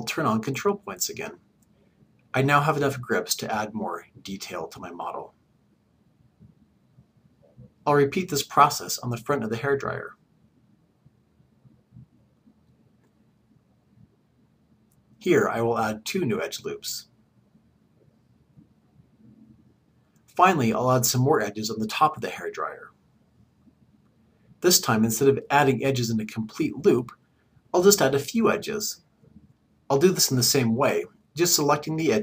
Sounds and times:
Speech: 0.0 - 1.4, 2.4 - 5.3, 7.8 - 10.2, 15.2 - 17.1, 20.3 - 23.0, 24.6 - 27.2, 27.8 - 29.0, 29.9 - 32.2.

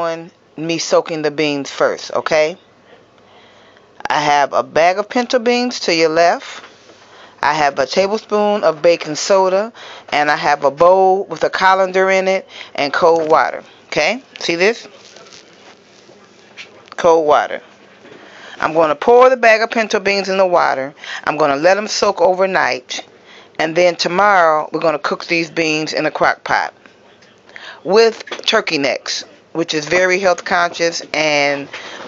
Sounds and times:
Speech: 0.0 - 2.6, 4.0 - 6.6, 7.4 - 18.0, 18.6 - 31.7.

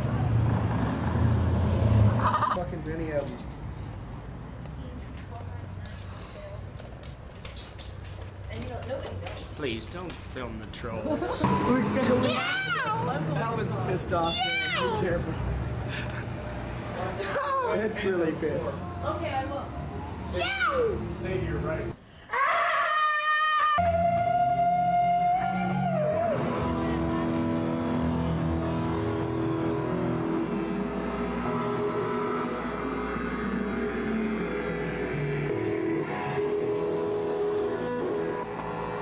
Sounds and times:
Car: 0.0 - 2.7, 11.4 - 17.7.

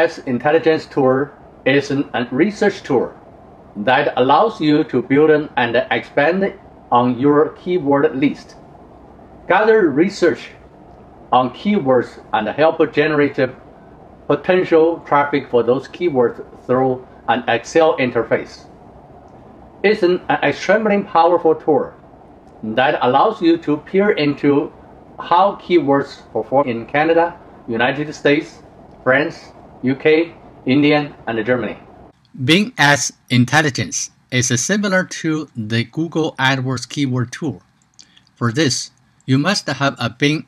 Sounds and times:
Speech: 0.0 - 3.2, 3.8 - 8.5, 9.5 - 10.6, 11.4 - 13.6, 14.3 - 18.6, 19.9 - 22.0, 22.6 - 31.8, 32.4 - 37.6, 38.4 - 40.4.

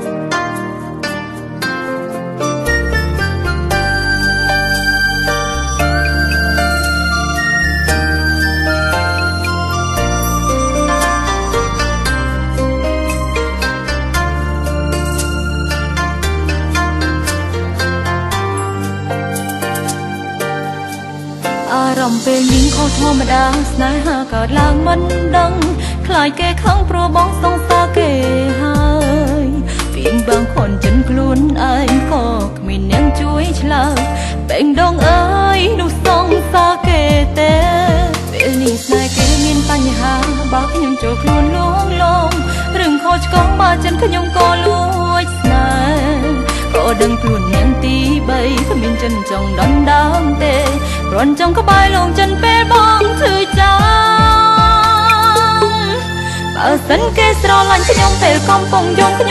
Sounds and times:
Music: 0.0 - 59.3.

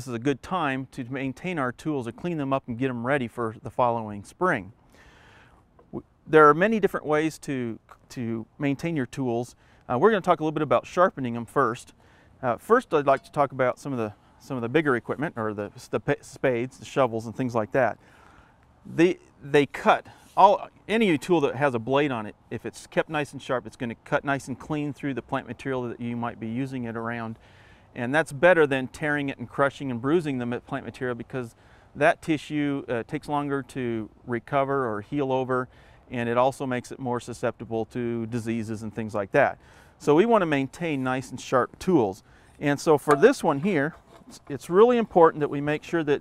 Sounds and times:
Speech: 0.0 - 4.8, 5.9 - 18.0, 18.9 - 27.4, 28.0 - 46.2.

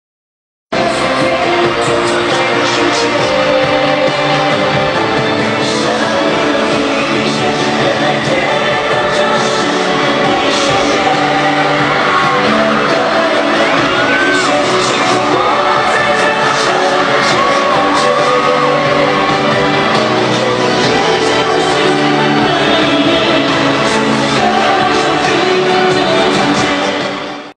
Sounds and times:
Music: 0.7 - 27.5
Male singing: 0.8 - 27.5.

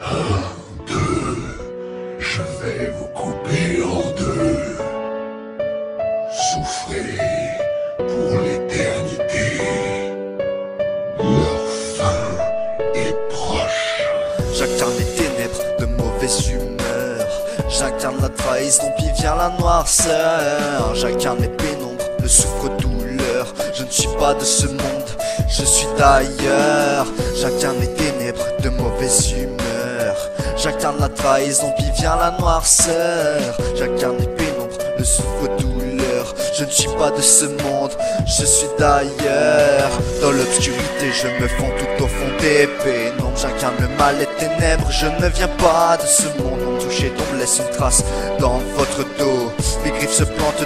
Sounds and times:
Music: 0.0 - 50.6.

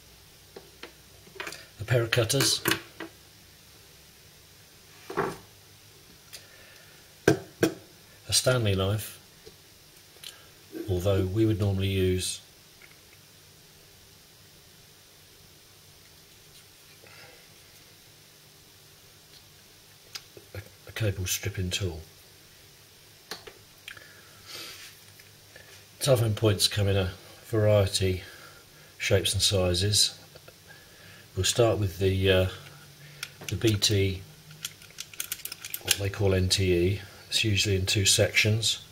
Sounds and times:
Speech: 1.8 - 2.8, 8.3 - 9.2, 10.8 - 12.5, 20.5 - 22.1, 26.0 - 28.4, 29.0 - 30.2, 31.4 - 32.7, 33.5 - 34.3, 35.8 - 38.9.

